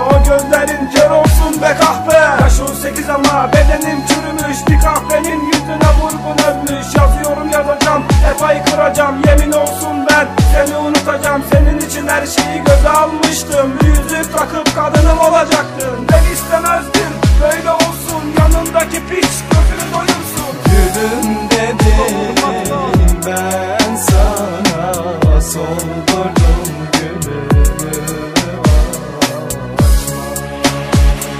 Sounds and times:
Middle Eastern music: 0:00.0 - 0:31.3.

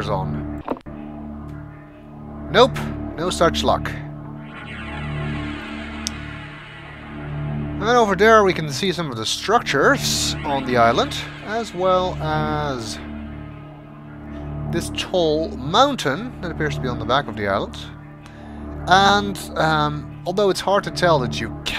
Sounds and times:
Speech: 0:00.0 - 0:00.4, 0:02.5 - 0:04.1, 0:07.8 - 0:13.0, 0:14.7 - 0:18.0, 0:18.9 - 0:21.7
Music: 0:00.0 - 0:21.7.

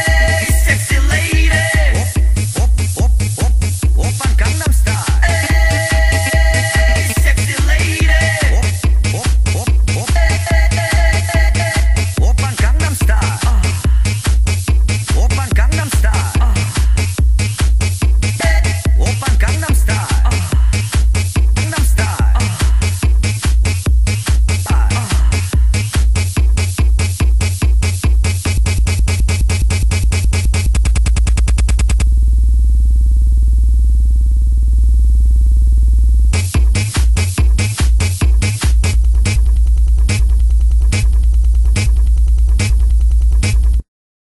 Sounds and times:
Electronic dance music: 0:00.0 - 0:32.0, 0:36.3 - 0:43.9
Techno: 0:00.0 - 0:32.1, 0:36.3 - 0:43.9.

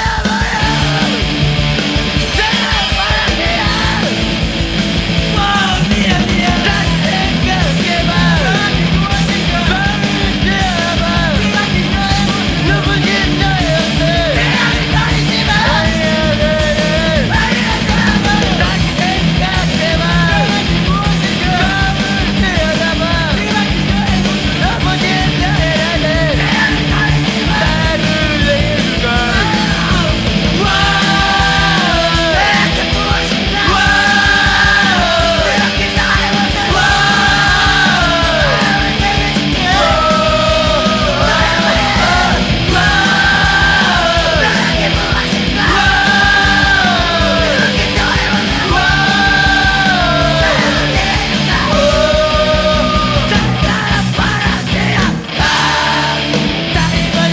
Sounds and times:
Music: 0:00.0 - 0:57.3.

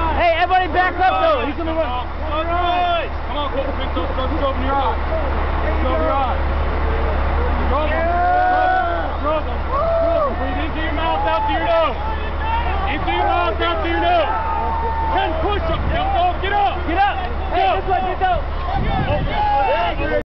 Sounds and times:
Speech: 0:00.0 - 0:06.5, 0:10.4 - 0:14.3, 0:15.1 - 0:20.2.

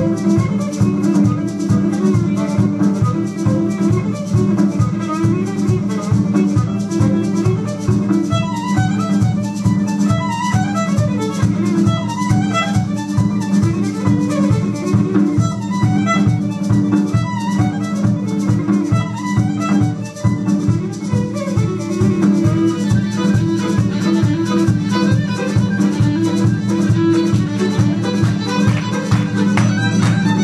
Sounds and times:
Violin, fiddle: 0:00.0 - 0:30.4.

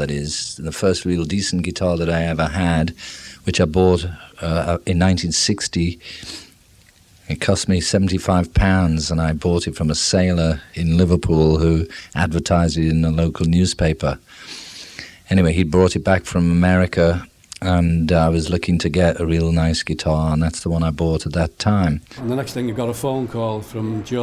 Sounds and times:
Speech: 0:00.0 - 0:06.0, 0:07.2 - 0:14.2, 0:15.3 - 0:24.2.

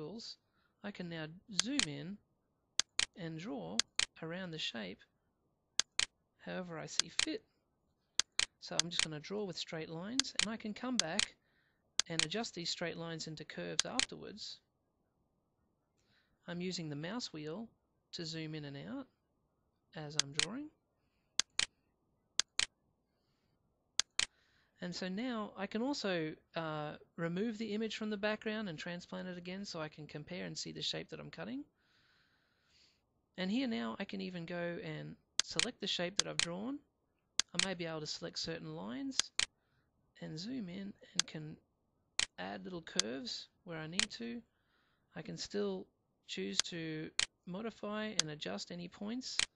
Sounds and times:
Speech: 0:00.0 - 0:02.2, 0:03.1 - 0:05.1, 0:06.4 - 0:07.5, 0:08.6 - 0:11.4, 0:12.0 - 0:14.7, 0:16.4 - 0:19.1, 0:20.0 - 0:20.8, 0:24.8 - 0:31.8, 0:33.4 - 0:36.9, 0:37.5 - 0:39.4, 0:40.2 - 0:41.6, 0:42.3 - 0:44.5, 0:45.2 - 0:49.5.

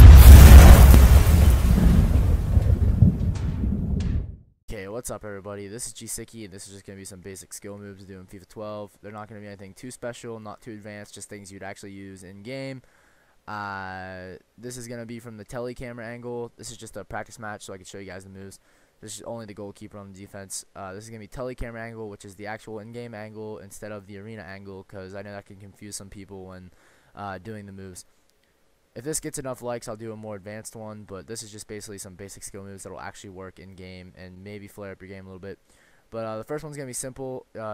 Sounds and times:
Speech: 0:04.7 - 0:12.8, 0:13.5 - 0:28.1, 0:29.0 - 0:37.7.

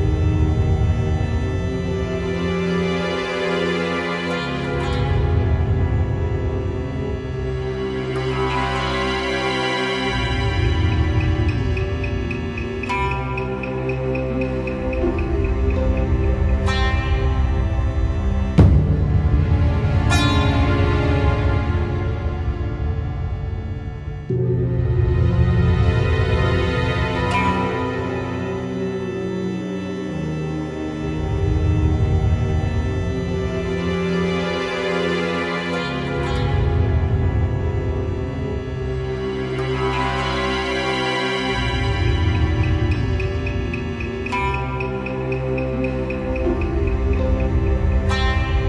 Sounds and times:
Music: 0:00.0 - 0:48.6.

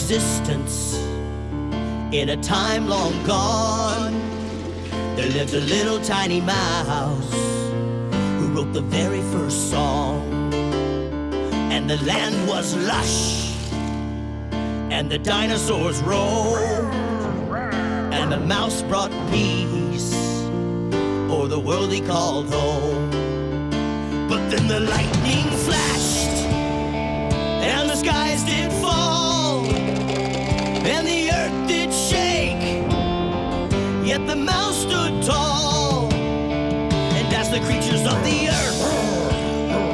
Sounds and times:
Music: 0:00.0 - 0:39.9.

